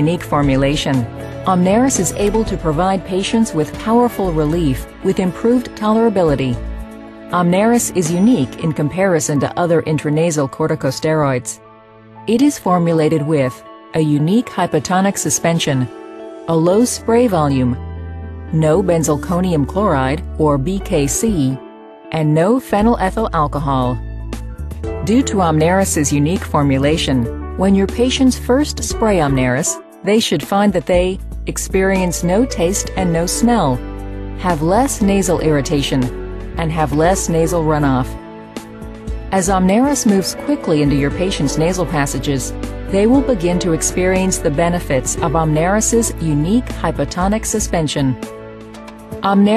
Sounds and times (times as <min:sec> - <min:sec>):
Speech: 0:00.0 - 0:06.6, 0:07.3 - 0:11.6, 0:12.3 - 0:15.9, 0:16.5 - 0:17.8, 0:18.5 - 0:24.0, 0:25.0 - 0:33.8, 0:34.4 - 0:38.2, 0:39.3 - 0:48.2, 0:49.2 - 0:49.5
Music: 0:00.0 - 0:49.5.